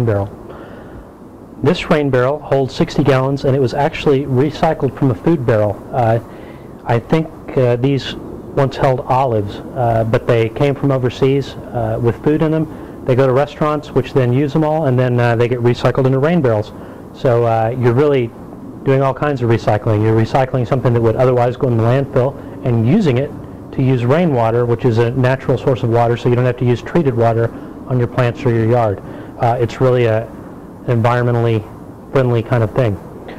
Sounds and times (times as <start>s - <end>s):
Speech: 0.0s - 0.4s, 1.6s - 33.3s.